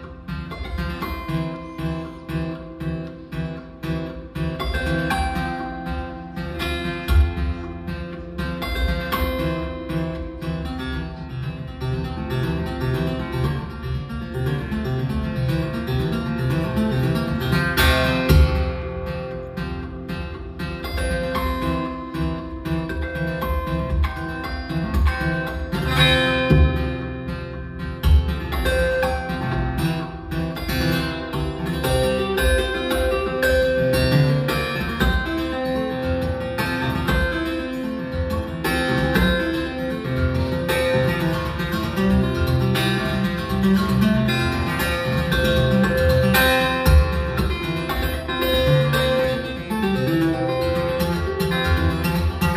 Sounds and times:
Music: 0:00.0 - 0:52.5.

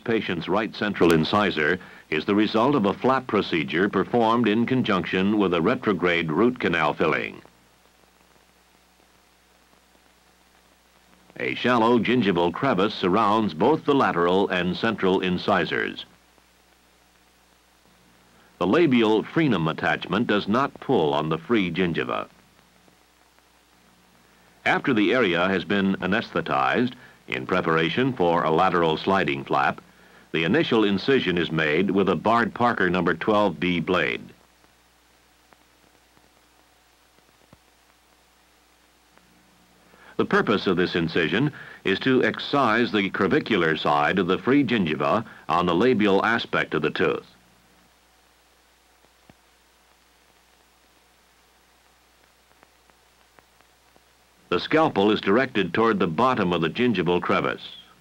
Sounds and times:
Speech: 0:00.0 - 0:07.5, 0:11.4 - 0:16.2, 0:18.6 - 0:22.3, 0:24.6 - 0:34.4, 0:40.2 - 0:47.4, 0:54.5 - 0:58.0.

